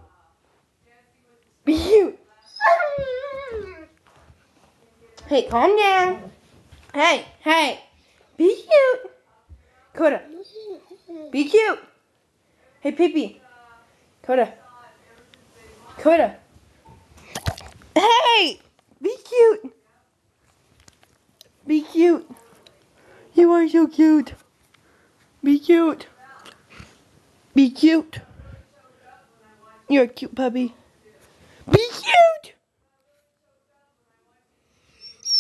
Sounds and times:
Speech: 0:00.0 - 0:06.3, 0:12.6 - 0:16.5, 0:27.6 - 0:34.7.

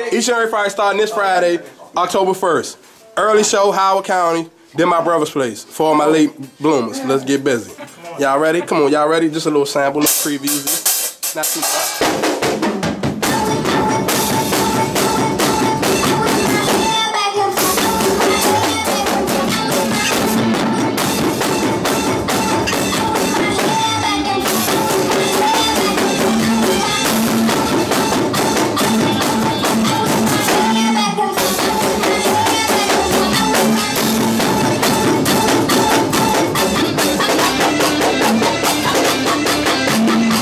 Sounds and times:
Music: 0:10.0 - 0:40.4.

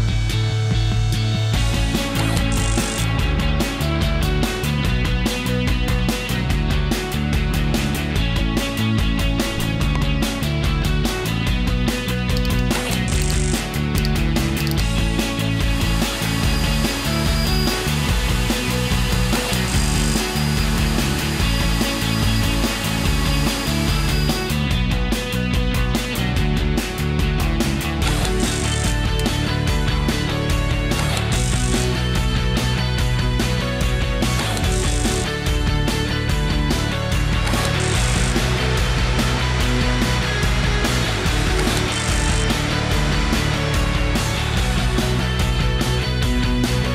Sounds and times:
Music: 0:00.0 - 0:46.9.

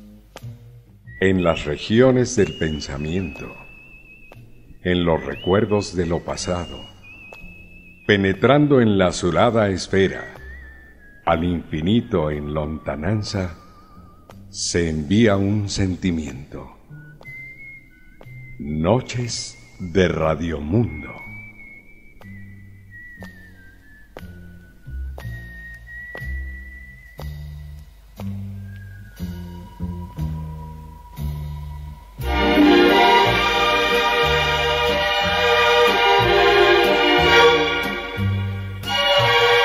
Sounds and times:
Music: 0:00.0 - 0:39.6
Speech: 0:01.2 - 0:03.6, 0:04.8 - 0:06.9, 0:08.1 - 0:10.4, 0:11.3 - 0:13.6, 0:14.5 - 0:16.8, 0:18.6 - 0:21.3.

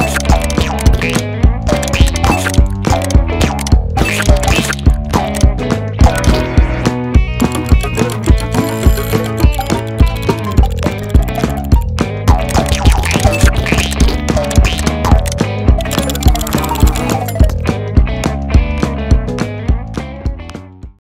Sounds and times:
Music: 0:00.0 - 0:21.0.

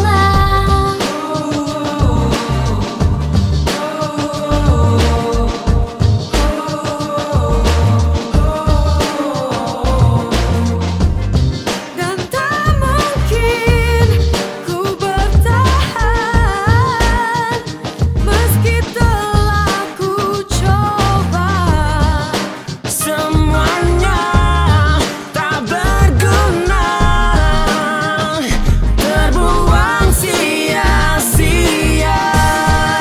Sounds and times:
Music: 0:00.0 - 0:33.0.

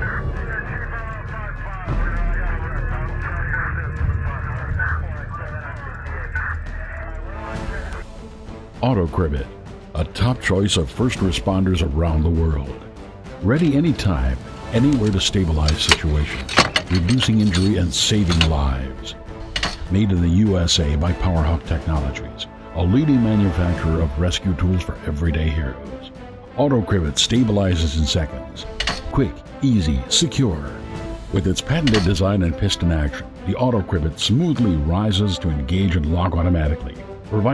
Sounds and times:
Speech: 0:00.0 - 0:08.0, 0:08.8 - 0:19.2, 0:19.8 - 0:37.5
Music: 0:00.0 - 0:37.5
Tools: 0:15.7 - 0:18.6, 0:19.6 - 0:19.8, 0:28.8 - 0:29.0, 0:31.8 - 0:32.2.

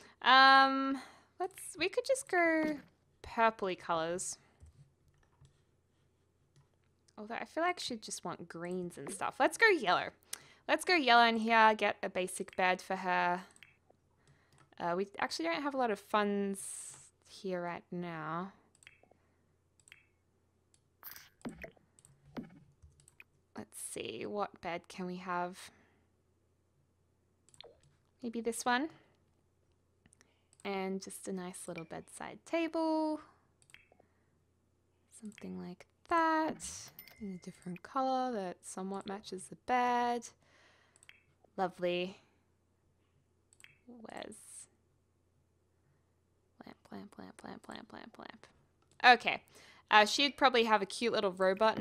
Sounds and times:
Speech: 0:00.0 - 0:04.4, 0:07.2 - 0:13.6, 0:14.8 - 0:18.6, 0:23.6 - 0:25.7, 0:28.2 - 0:29.0, 0:30.7 - 0:33.3, 0:35.2 - 0:40.4, 0:41.6 - 0:42.2, 0:43.9 - 0:44.7, 0:46.6 - 0:51.8.

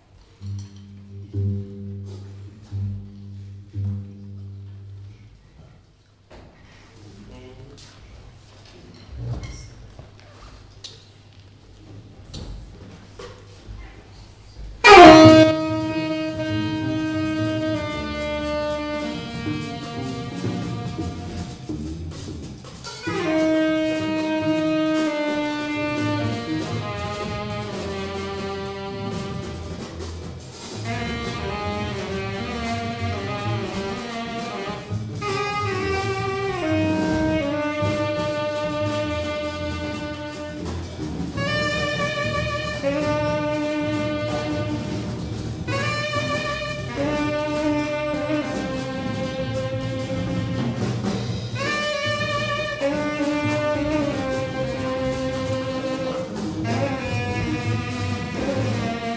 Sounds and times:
Percussion: 0:14.6 - 0:59.1.

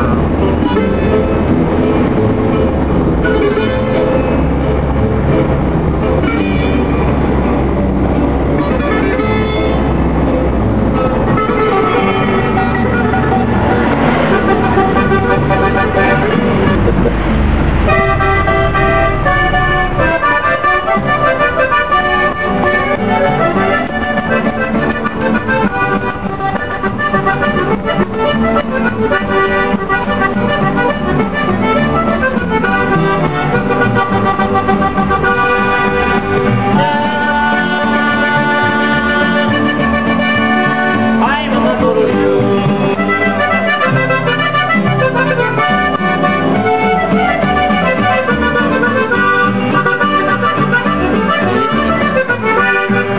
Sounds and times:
Outside, rural or natural: 0:00.0 - 0:38.7
Music: 0:00.0 - 0:53.1
Vehicle: 0:00.0 - 0:53.1.

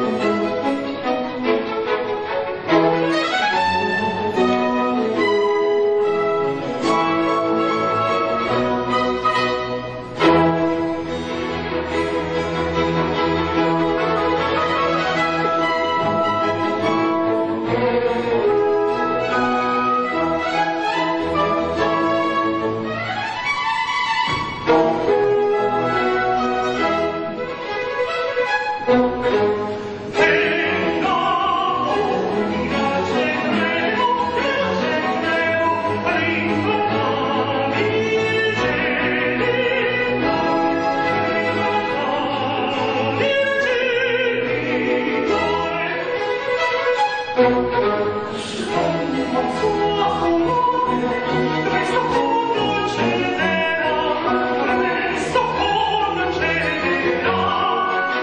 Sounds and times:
Classical music: 0:00.0 - 0:58.2
Orchestra: 0:00.0 - 0:58.2
Violin, fiddle: 0:00.0 - 0:58.2.

